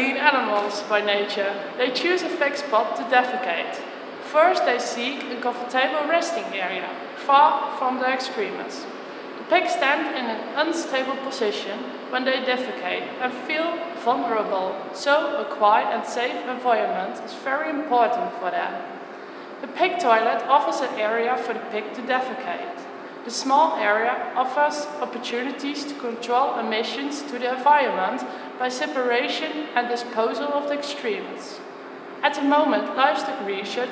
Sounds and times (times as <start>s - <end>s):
Speech: 0.0s - 18.9s, 19.6s - 33.9s.